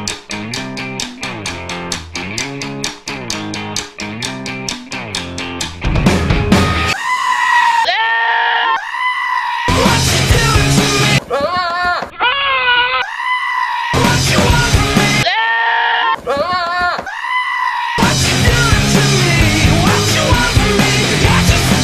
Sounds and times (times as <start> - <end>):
Music: 0.0 - 7.0, 9.7 - 11.2, 14.0 - 15.2, 18.0 - 21.8.